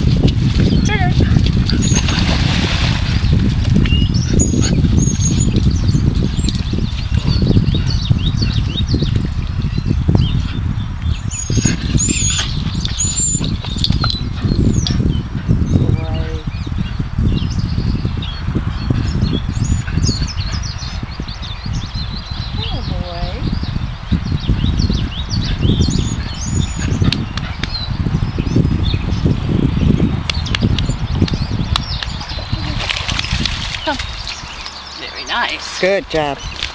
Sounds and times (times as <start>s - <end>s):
Stream: 0.0s - 3.8s, 31.9s - 36.7s.